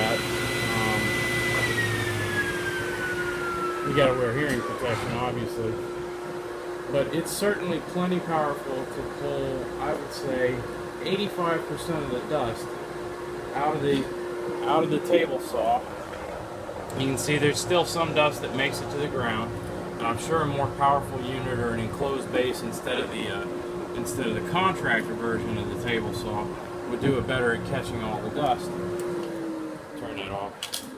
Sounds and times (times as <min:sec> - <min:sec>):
Speech: 0:00.0 - 0:01.8, 0:03.9 - 0:05.8, 0:06.9 - 0:12.7, 0:13.5 - 0:15.8, 0:16.9 - 0:28.7, 0:30.0 - 0:30.6.